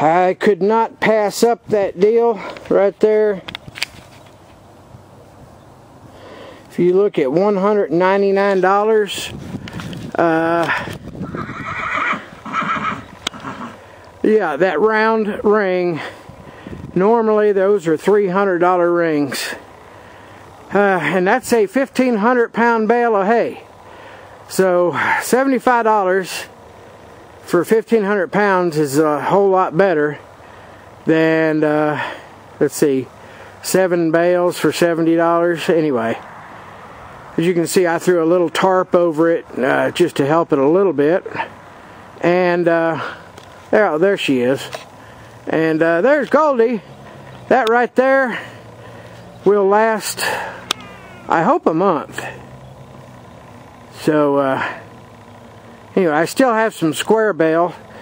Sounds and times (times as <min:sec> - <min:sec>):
Neigh, whinny: 0:11.2 - 0:13.8, 0:50.7 - 0:51.4.